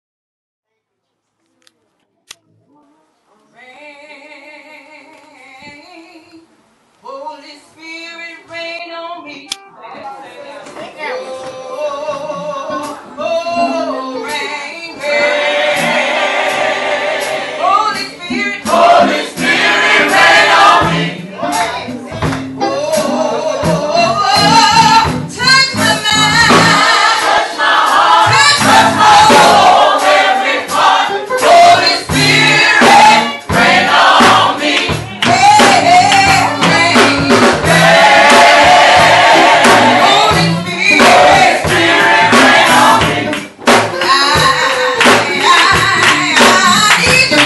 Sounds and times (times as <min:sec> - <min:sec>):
Music: 0:11.0 - 0:47.4.